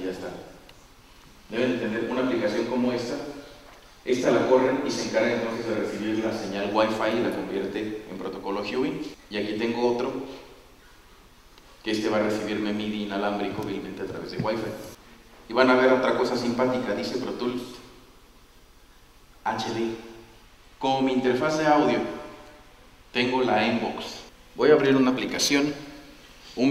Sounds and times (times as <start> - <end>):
Speech: 0.0 - 0.6, 1.5 - 10.5, 11.8 - 18.0, 19.4 - 20.2, 20.8 - 22.4, 23.2 - 26.0.